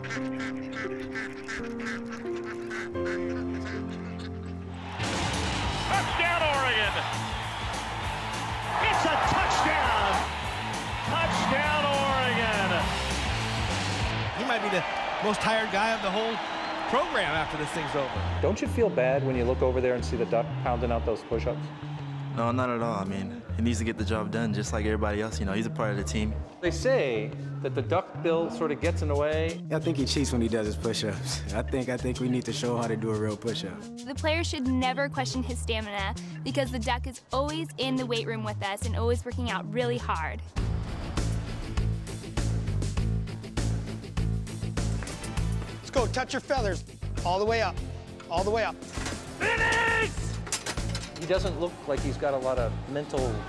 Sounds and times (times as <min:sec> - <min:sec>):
Music: 0:00.0 - 0:53.4
Speech: 0:22.5 - 0:40.4.